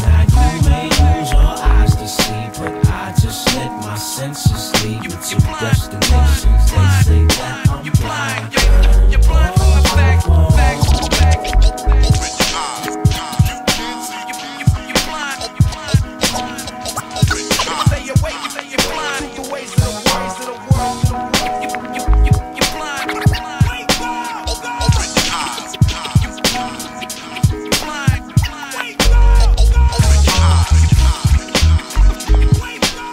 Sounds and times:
Hip hop music: 0:00.0 - 0:33.1.

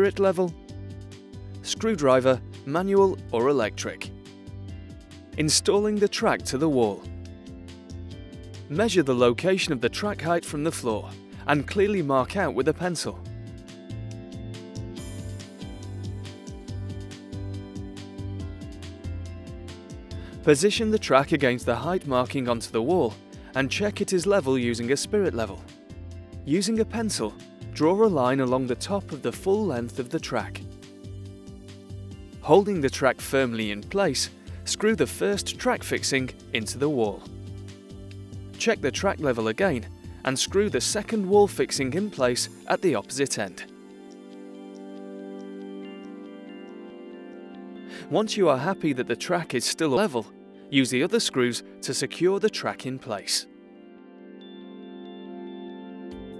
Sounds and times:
Speech: 0:00.0 - 0:00.6, 0:01.7 - 0:04.1, 0:05.4 - 0:07.1, 0:08.7 - 0:13.2, 0:20.4 - 0:25.6, 0:26.5 - 0:30.6, 0:32.4 - 0:37.3, 0:38.6 - 0:43.7, 0:48.1 - 0:53.5
Music: 0:00.0 - 0:56.3.

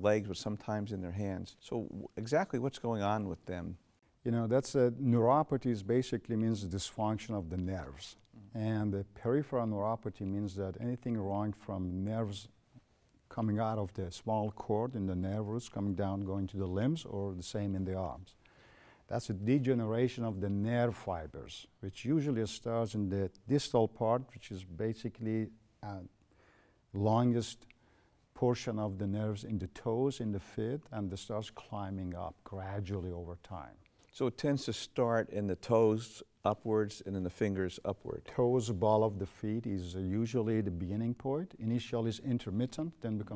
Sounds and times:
Speech: 0:00.0 - 0:12.6, 0:13.3 - 0:18.4, 0:19.1 - 0:26.2, 0:26.9 - 0:43.3.

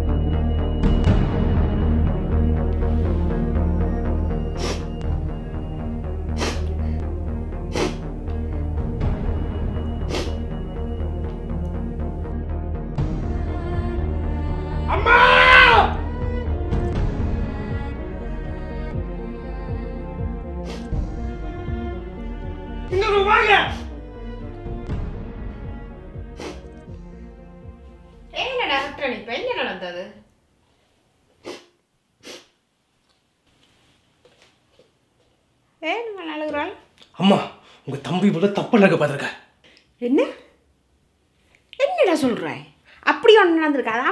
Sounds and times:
Inside, small room: 0:19.1 - 0:44.1.

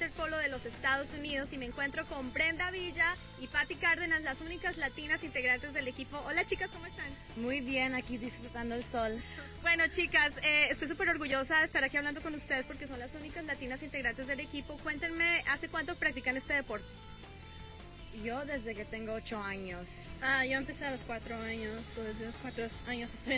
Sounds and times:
Music: 0:00.0 - 0:23.3.

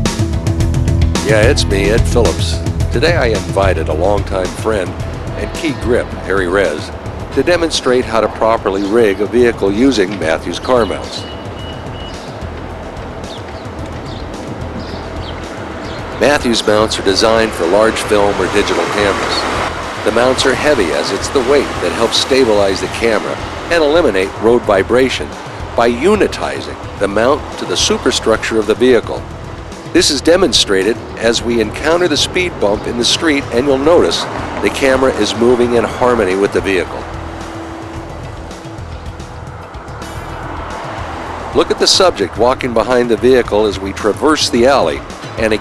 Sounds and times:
Music: 0:00.0 - 0:45.6
Speech: 0:01.2 - 0:11.3, 0:16.2 - 0:19.4, 0:20.1 - 0:29.2, 0:30.0 - 0:37.0, 0:41.6 - 0:45.6.

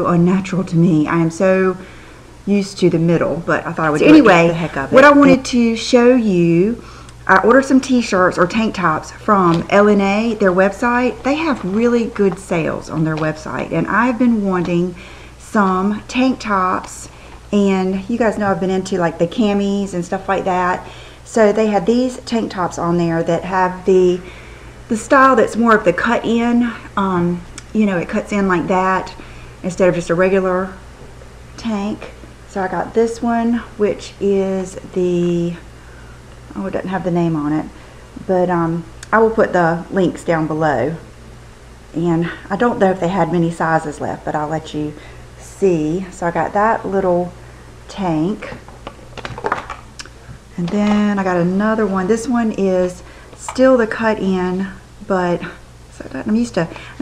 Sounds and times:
Speech: 0:00.0 - 0:01.8, 0:02.5 - 0:24.3, 0:24.9 - 0:30.8, 0:31.6 - 0:35.7, 0:36.5 - 0:41.0, 0:42.0 - 0:48.6, 0:50.6 - 0:57.0
Inside, small room: 0:00.0 - 0:57.0.

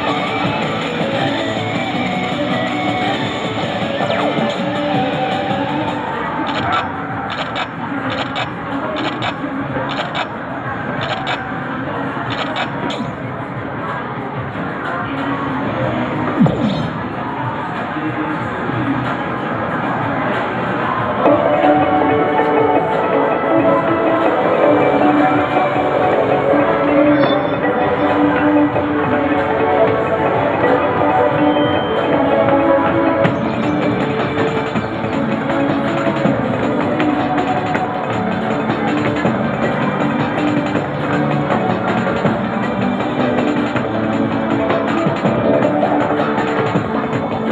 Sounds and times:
Music: 0:00.0 - 0:47.5.

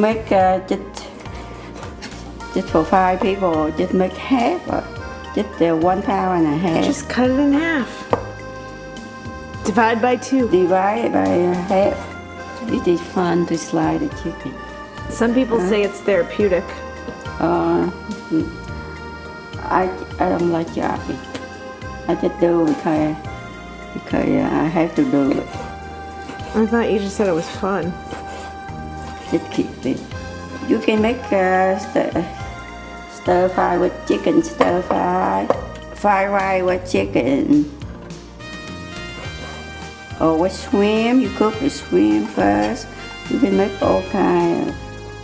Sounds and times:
Music: 0:00.0 - 0:45.2
Speech: 0:05.4 - 0:07.9, 0:15.1 - 0:16.7, 0:22.1 - 0:23.2, 0:26.6 - 0:28.0, 0:30.6 - 0:32.3, 0:33.3 - 0:37.7, 0:40.2 - 0:44.8.

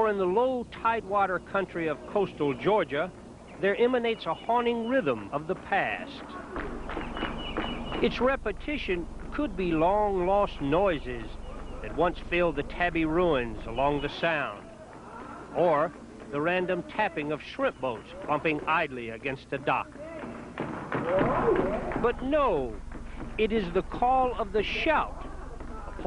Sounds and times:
Speech: 0:00.0 - 0:06.5, 0:08.0 - 0:20.3, 0:22.0 - 0:22.8, 0:23.4 - 0:26.0.

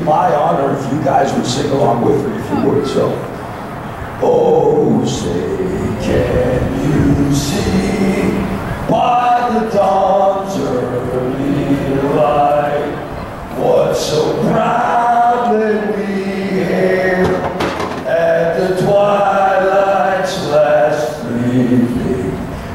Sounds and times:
Male singing: 0:04.2 - 0:13.0, 0:13.6 - 0:22.5.

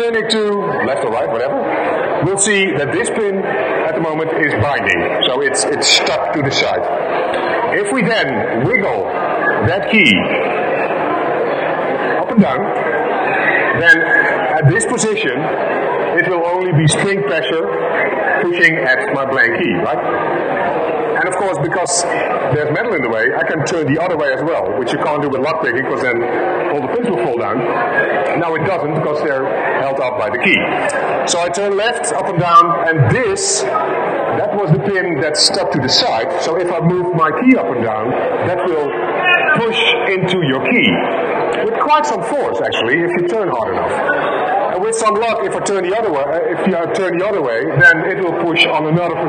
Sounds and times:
Narration, monologue: 0:00.0 - 0:10.4, 0:21.2 - 0:44.0, 0:44.7 - 0:49.2.

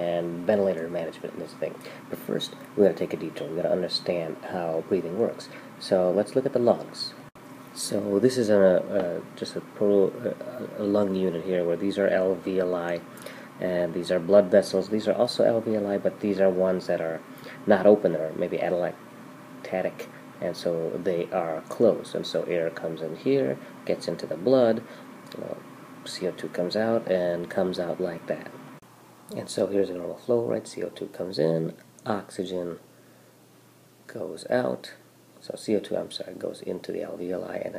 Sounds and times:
Speech: 0:00.0 - 0:07.2, 0:07.8 - 0:19.0, 0:19.6 - 0:28.6, 0:29.3 - 0:32.8, 0:34.1 - 0:37.7.

